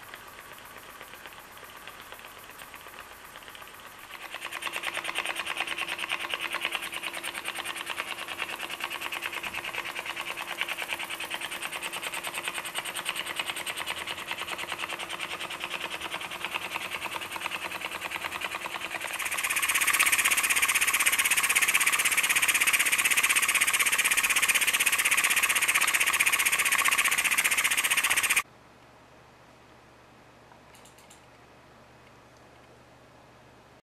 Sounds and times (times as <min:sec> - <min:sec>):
Idling: 0:01.9 - 0:28.4.